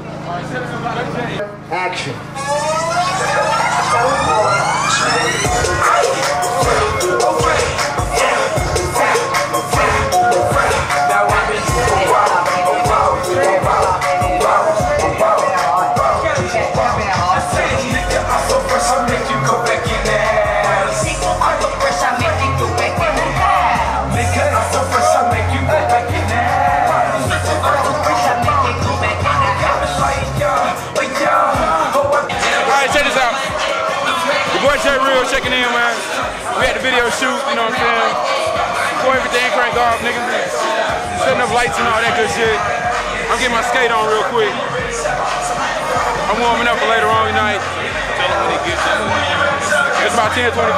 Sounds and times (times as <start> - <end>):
Music: 2.4 - 50.7.